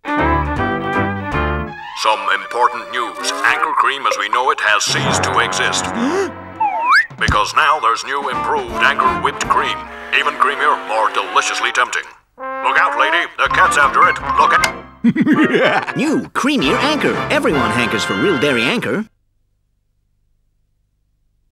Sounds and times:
Music: 0.0 - 19.0
Speech: 2.0 - 6.3, 7.2 - 14.7, 15.9 - 19.1.

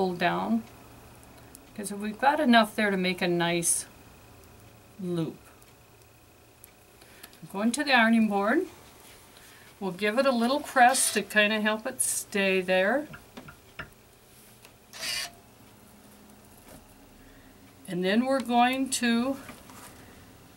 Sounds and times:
Speech: 0.0 - 0.7, 1.8 - 3.9, 5.0 - 5.4, 7.4 - 8.7, 9.8 - 13.1, 17.9 - 19.4.

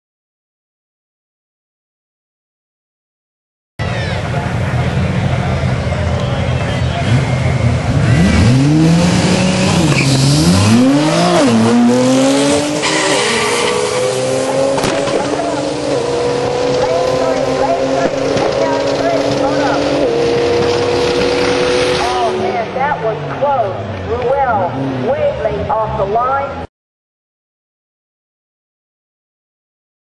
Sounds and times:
Race car, auto racing: 3.8 - 26.7
Tire squeal: 5.8 - 11.6, 12.6 - 14.6
Speech: 16.7 - 20.2, 22.0 - 26.7.

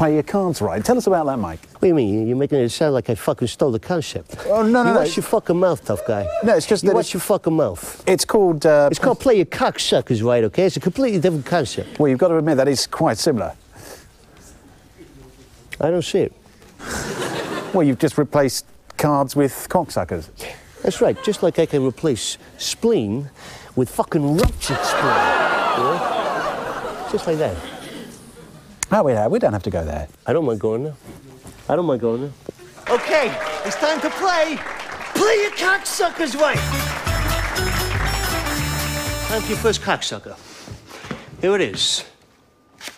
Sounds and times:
Speech: 0.0 - 13.6, 17.7 - 26.0, 35.2 - 36.6, 39.3 - 40.4, 41.4 - 42.2.

